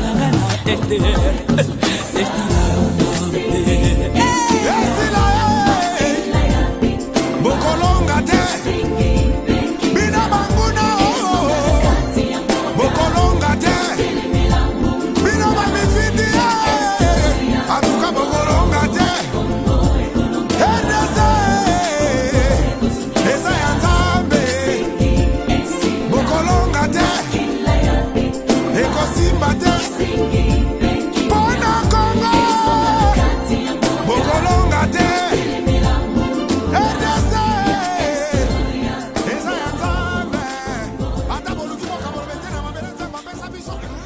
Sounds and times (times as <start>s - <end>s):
Music of Africa: 0.0s - 44.0s
Singing: 0.0s - 44.0s.